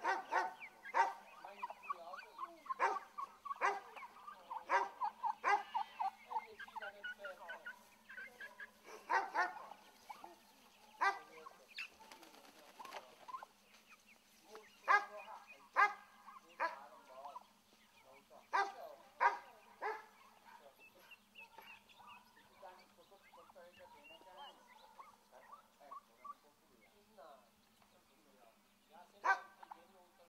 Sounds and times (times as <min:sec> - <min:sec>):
Bird: 0:00.0 - 0:30.2
Speech: 0:01.3 - 0:03.0, 0:03.6 - 0:08.5, 0:11.0 - 0:13.4, 0:14.4 - 0:21.8, 0:22.4 - 0:30.2.